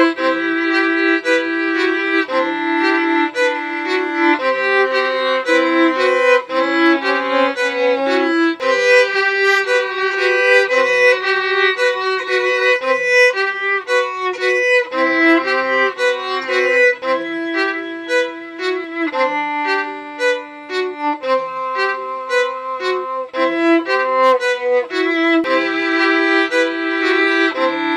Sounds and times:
Violin, fiddle: 0.0 - 27.9.

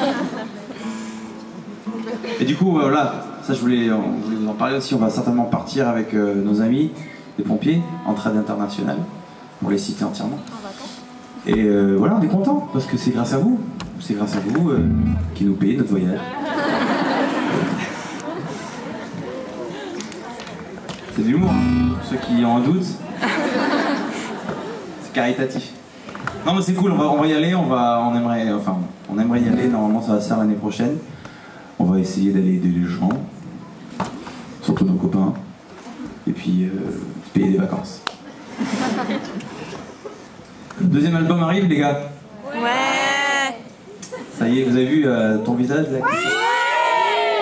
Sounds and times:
Male speech, man speaking: 2.4 - 10.5, 11.5 - 16.3, 21.1 - 23.0, 25.0 - 25.8, 26.4 - 31.1, 31.8 - 33.3, 34.6 - 35.5, 36.2 - 38.0, 40.8 - 42.2, 44.4 - 46.1
Music: 14.8 - 15.6, 21.4 - 22.2.

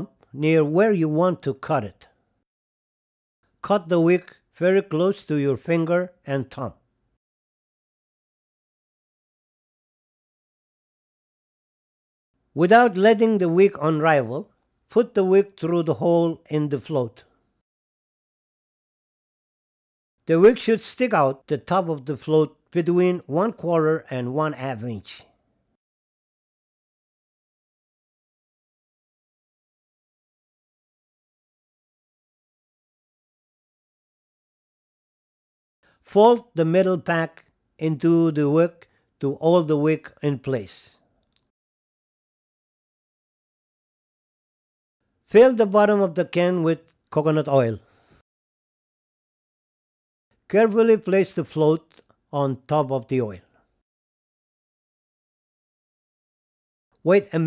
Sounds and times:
Speech: 0.0 - 2.2, 3.7 - 6.8, 12.6 - 17.3, 20.3 - 25.3, 36.1 - 41.0, 45.3 - 47.8, 50.5 - 53.5, 57.0 - 57.4.

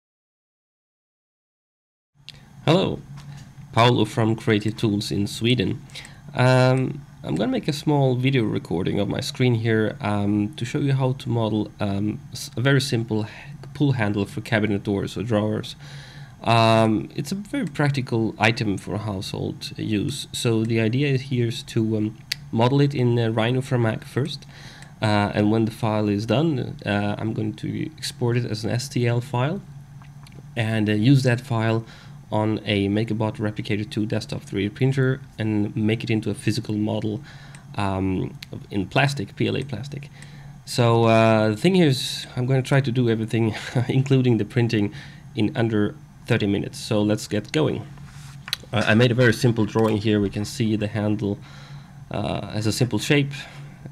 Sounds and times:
Speech: 2.7 - 3.1, 3.7 - 15.8, 16.4 - 29.7, 30.6 - 40.1, 40.7 - 47.9, 48.6 - 51.4, 52.1 - 53.9.

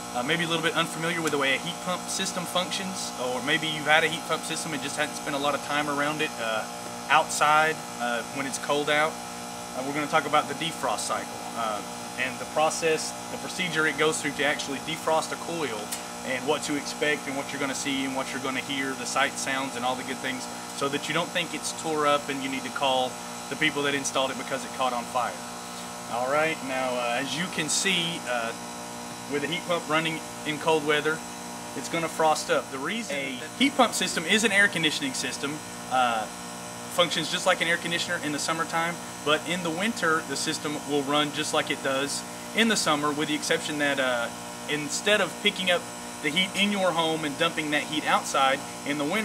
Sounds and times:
Speech: 0.2 - 9.2, 9.8 - 25.4, 26.1 - 28.6, 29.3 - 31.2, 31.8 - 36.3, 36.9 - 49.2.

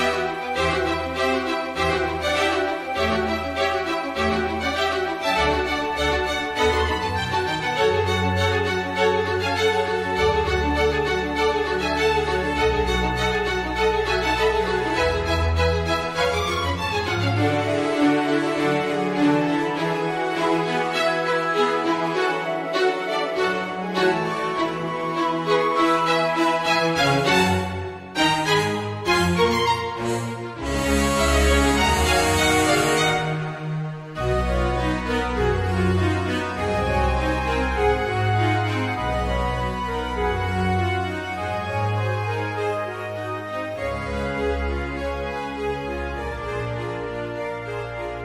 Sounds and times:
Piano: 0.0 - 48.2.

